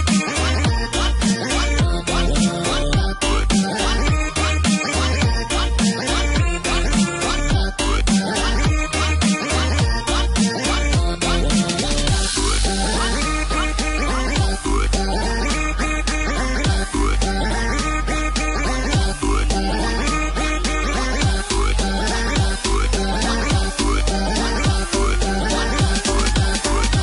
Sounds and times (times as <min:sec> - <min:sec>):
Music: 0:00.0 - 0:27.0.